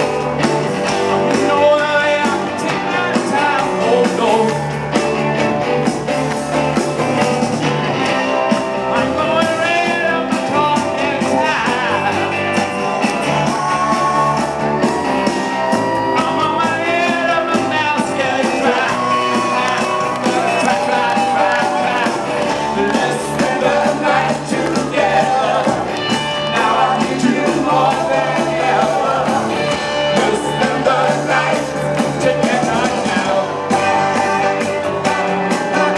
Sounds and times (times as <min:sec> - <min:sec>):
Rock and roll: 0:00.0 - 0:35.9
Singing: 0:01.3 - 0:04.8, 0:08.8 - 0:15.0, 0:15.6 - 0:35.9.